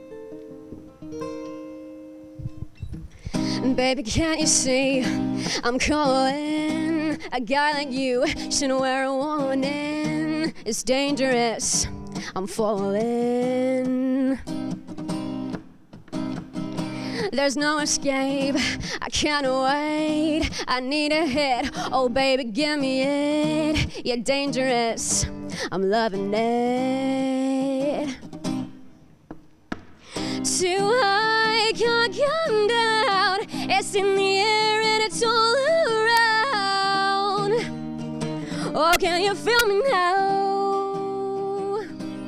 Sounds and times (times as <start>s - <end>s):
Music: 0.0s - 29.1s, 30.1s - 42.2s.